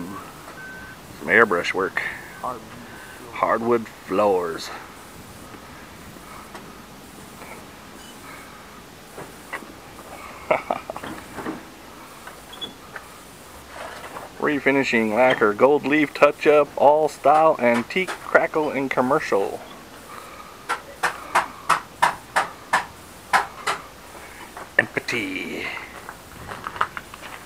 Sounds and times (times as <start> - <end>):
Speech: 0.0 - 0.2, 1.2 - 4.8, 14.4 - 19.7, 24.8 - 26.0
Outside, urban or manmade: 0.0 - 27.4.